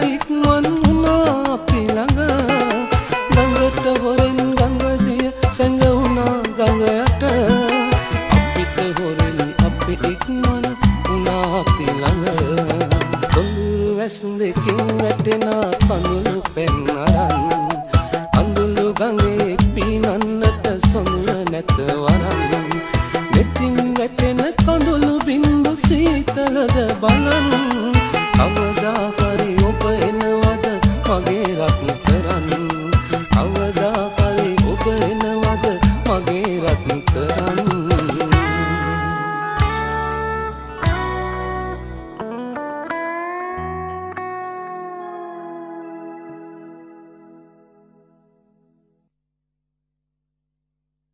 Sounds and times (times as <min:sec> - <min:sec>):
Music: 0:00.0 - 0:49.1.